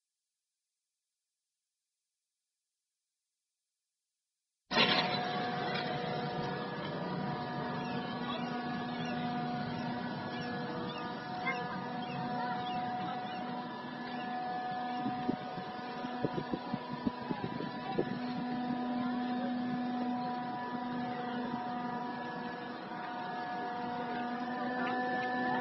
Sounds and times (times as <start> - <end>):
Sailboat, sailing ship: 4.7 - 25.6
Speech: 7.8 - 9.2, 10.4 - 14.3, 16.6 - 20.3.